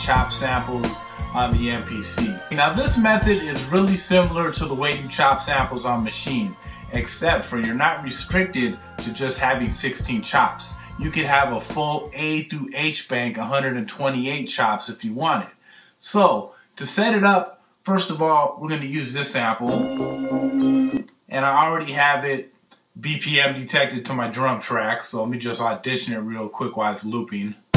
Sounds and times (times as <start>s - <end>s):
Music: 0.0s - 12.2s, 19.6s - 21.0s
Speech: 0.0s - 19.8s, 21.3s - 27.6s.